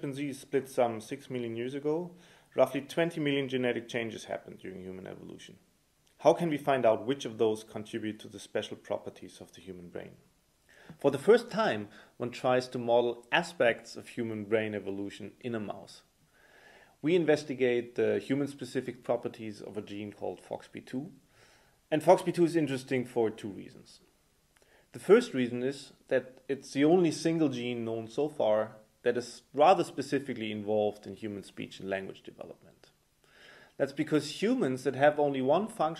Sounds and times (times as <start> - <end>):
Speech: 0.0 - 10.3, 11.0 - 16.1, 17.0 - 21.2, 21.9 - 24.1, 25.0 - 33.0, 33.8 - 35.9.